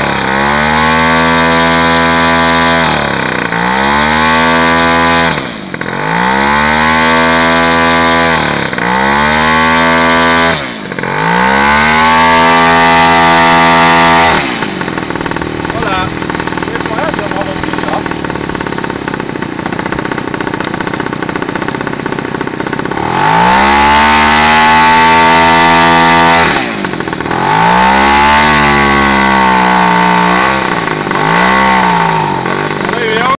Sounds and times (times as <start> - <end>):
Accelerating, revving, vroom: 0.0 - 14.7, 22.9 - 32.7
Speech: 15.7 - 16.1, 16.7 - 18.0, 32.9 - 33.4.